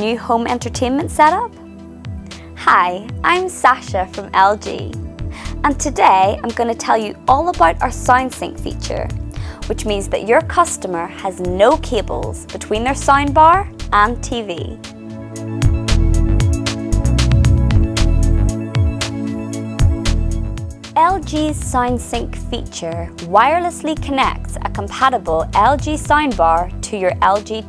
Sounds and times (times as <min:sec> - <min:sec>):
Speech: 0:00.0 - 0:01.5, 0:02.6 - 0:05.0, 0:05.6 - 0:14.8, 0:21.0 - 0:27.6
Music: 0:00.0 - 0:27.6.